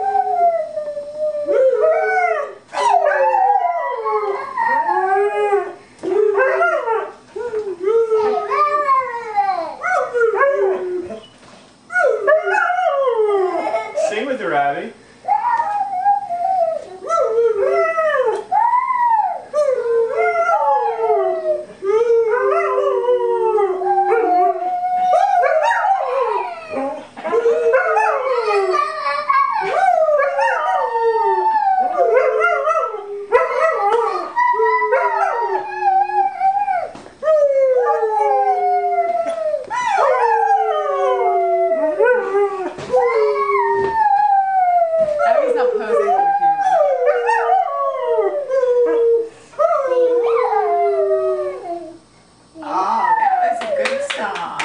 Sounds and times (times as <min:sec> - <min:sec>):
Howl: 0:00.0 - 0:11.2, 0:11.9 - 0:14.0, 0:15.3 - 0:52.0.